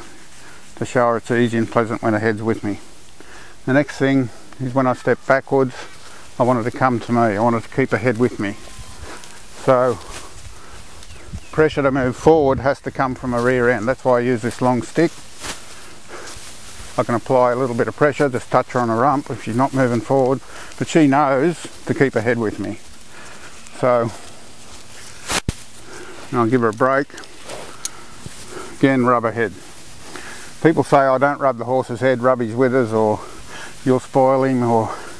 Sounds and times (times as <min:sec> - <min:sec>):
Speech: 0:00.8 - 0:02.9, 0:03.7 - 0:08.6, 0:09.6 - 0:10.1, 0:11.5 - 0:15.2, 0:17.0 - 0:22.8, 0:23.7 - 0:24.2, 0:26.3 - 0:27.2, 0:28.8 - 0:29.6, 0:30.6 - 0:35.1.